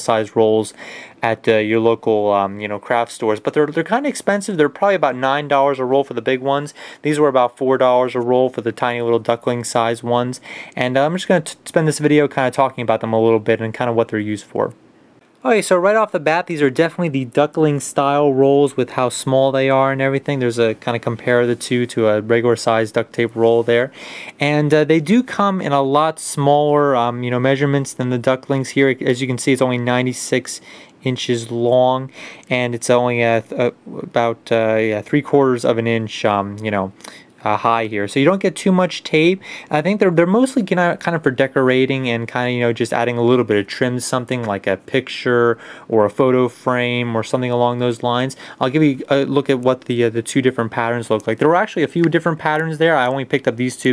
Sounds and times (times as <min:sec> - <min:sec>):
Speech: 0:00.0 - 0:14.8, 0:15.4 - 0:53.9.